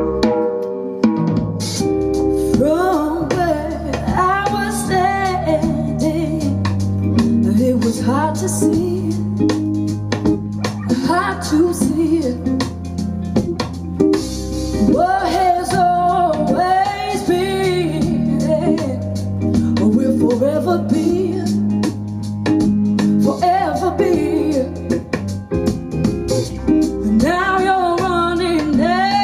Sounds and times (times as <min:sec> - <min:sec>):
Music: 0:00.0 - 0:29.2.